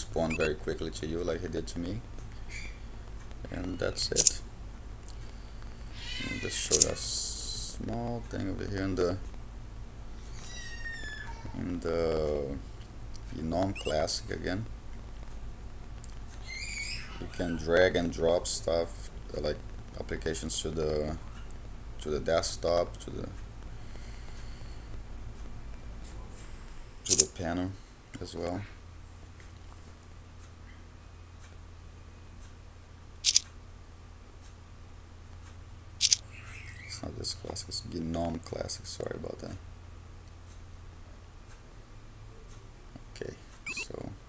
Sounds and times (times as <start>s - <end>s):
Speech: 0.0s - 2.0s, 3.4s - 4.4s, 6.2s - 9.2s, 11.4s - 12.6s, 13.2s - 14.7s, 17.1s - 21.4s, 22.0s - 23.4s, 27.1s - 28.8s, 36.9s - 39.6s, 43.1s - 44.2s.